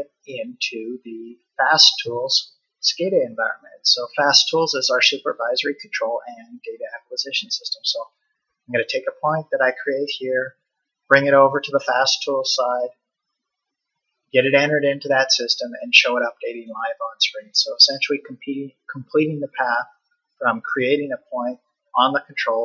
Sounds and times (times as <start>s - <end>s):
Speech: 0.0s - 8.1s, 8.7s - 10.5s, 11.1s - 12.9s, 14.4s - 22.6s.